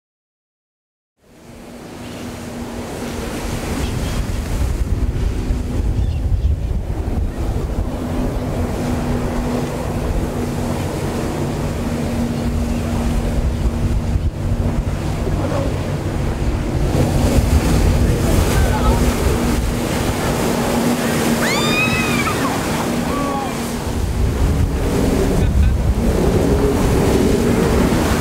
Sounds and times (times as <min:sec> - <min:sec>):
Outside, rural or natural: 0:01.2 - 0:28.2.